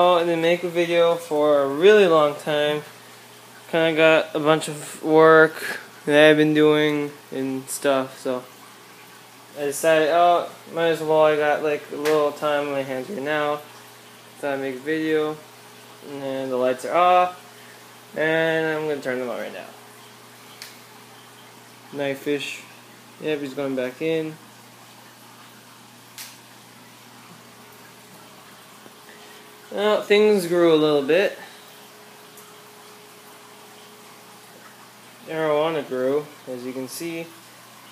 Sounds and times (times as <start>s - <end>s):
Speech: 0.0s - 2.9s, 3.7s - 8.5s, 9.6s - 13.6s, 14.4s - 15.4s, 16.0s - 17.4s, 18.2s - 19.8s, 21.9s - 24.4s, 29.7s - 31.4s, 35.3s - 37.4s.